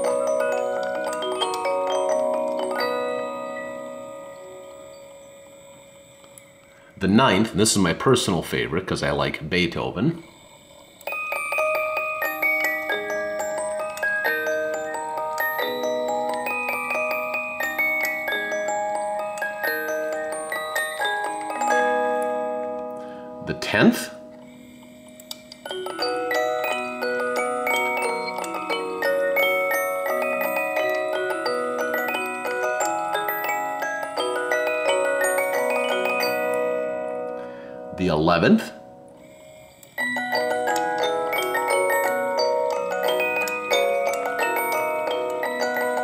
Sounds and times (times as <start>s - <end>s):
Glockenspiel: 0.0s - 8.7s, 10.2s - 46.0s.